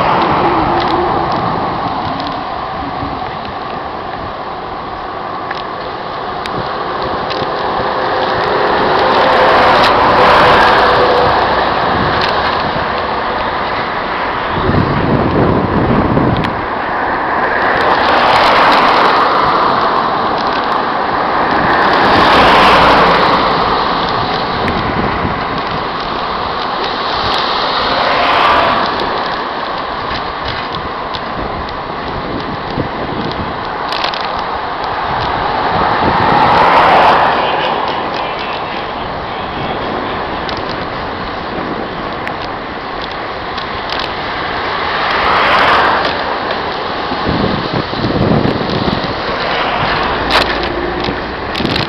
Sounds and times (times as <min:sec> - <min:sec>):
Bicycle: 0:00.0 - 0:51.8.